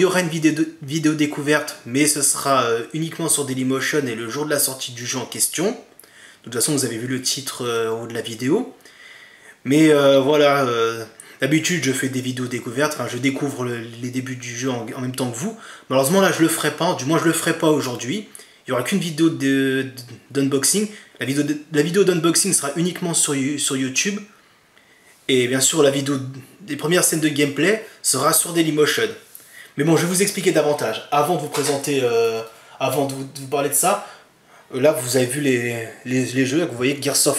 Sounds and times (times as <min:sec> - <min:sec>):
Speech: 0:00.0 - 0:08.8, 0:09.6 - 0:24.4, 0:25.3 - 0:37.3.